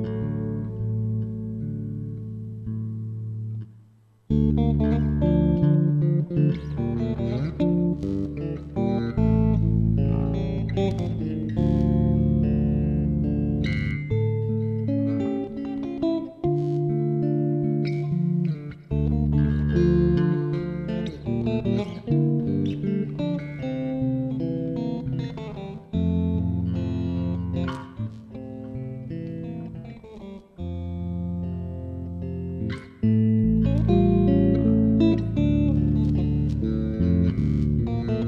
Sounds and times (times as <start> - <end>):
Bass guitar: 0.0 - 38.2.